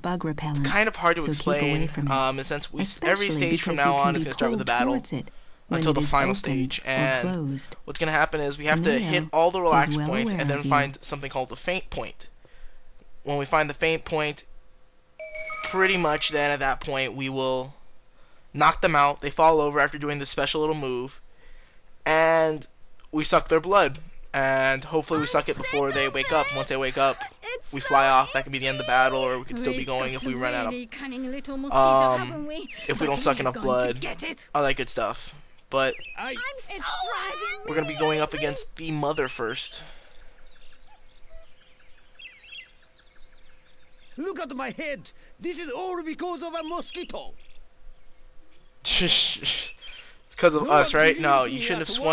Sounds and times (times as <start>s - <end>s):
Speech: 0.0s - 12.3s, 13.3s - 14.4s, 15.7s - 17.7s, 18.6s - 21.2s, 22.1s - 39.9s, 44.2s - 47.3s, 48.9s - 49.7s, 50.3s - 52.1s.